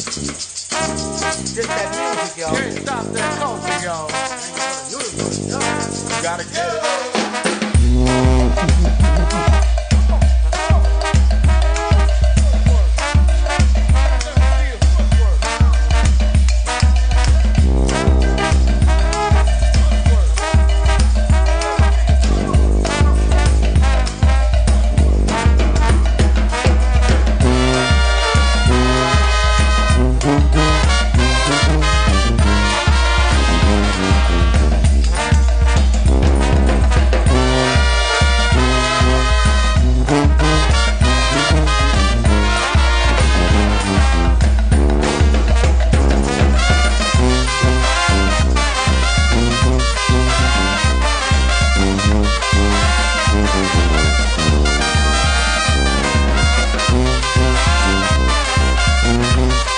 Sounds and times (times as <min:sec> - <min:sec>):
Background music: 0:00.0 - 0:59.7.